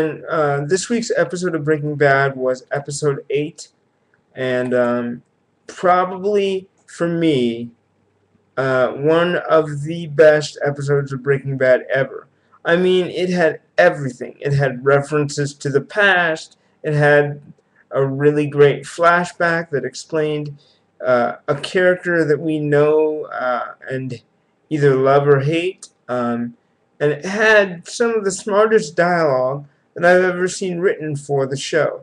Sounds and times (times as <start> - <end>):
Speech: 0.0 - 3.7, 4.4 - 7.7, 8.6 - 32.0.